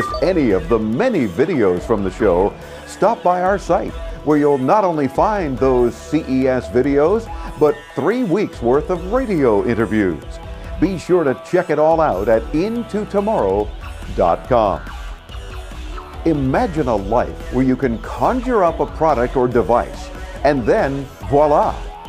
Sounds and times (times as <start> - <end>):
Speech: 0.0 - 14.8, 16.3 - 21.8
Music: 0.0 - 22.0.